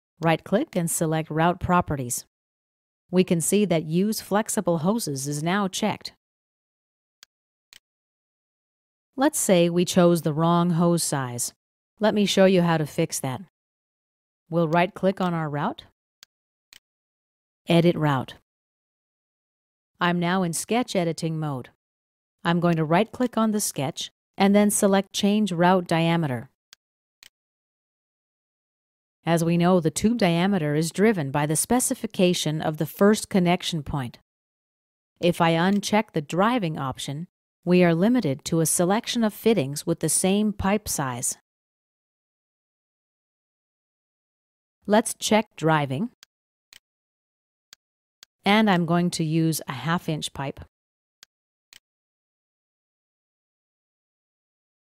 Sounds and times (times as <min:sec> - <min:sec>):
Speech: 0:00.2 - 0:02.3, 0:03.2 - 0:06.2, 0:09.2 - 0:13.5, 0:14.5 - 0:15.9, 0:17.7 - 0:18.4, 0:20.0 - 0:21.8, 0:22.5 - 0:26.5, 0:29.3 - 0:34.2, 0:35.2 - 0:41.4, 0:44.9 - 0:46.2, 0:48.5 - 0:50.7.